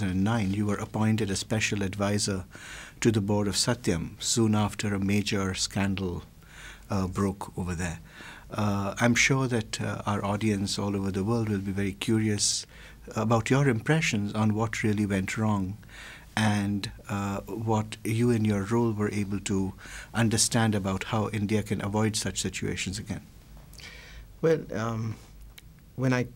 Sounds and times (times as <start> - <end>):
Speech: 0.0 - 6.3, 6.9 - 15.8, 16.4 - 23.3, 24.4 - 25.2, 26.0 - 26.3.